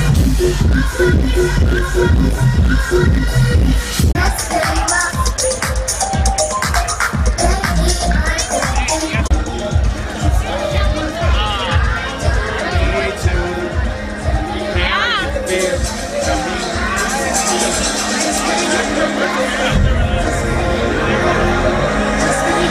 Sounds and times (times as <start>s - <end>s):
Music: 0.0s - 22.7s.